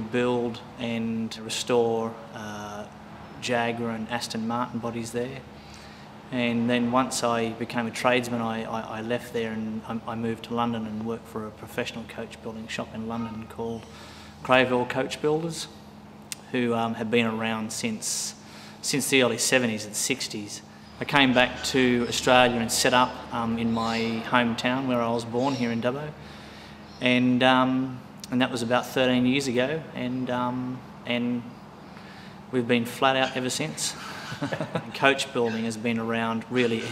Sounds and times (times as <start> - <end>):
Speech: 0.0 - 5.5, 6.3 - 13.9, 14.5 - 15.8, 16.4 - 26.2, 27.0 - 31.6, 32.5 - 34.0, 34.9 - 36.9.